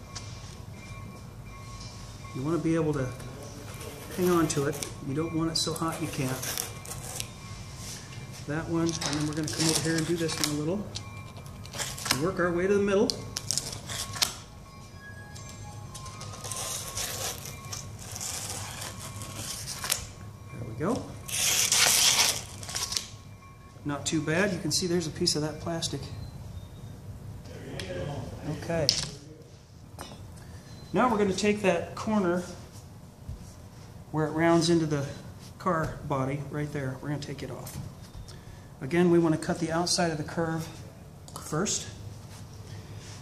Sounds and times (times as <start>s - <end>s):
Crackle: 21.2s - 23.2s.